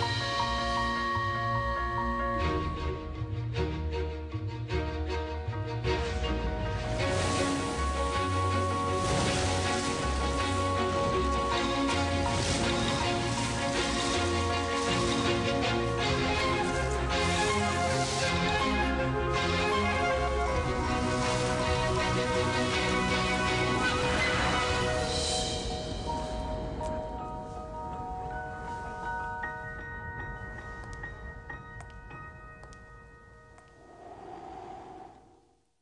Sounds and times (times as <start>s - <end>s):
Music: 0.0s - 34.5s
Rustling leaves: 6.6s - 31.2s.